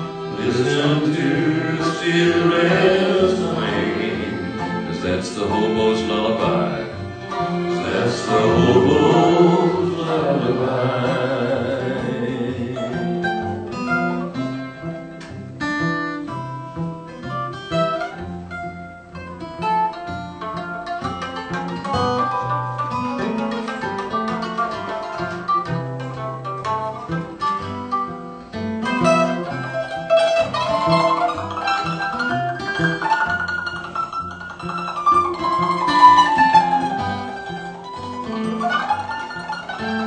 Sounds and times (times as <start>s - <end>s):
Guitar: 0.0s - 40.0s
Pizzicato: 0.0s - 40.0s.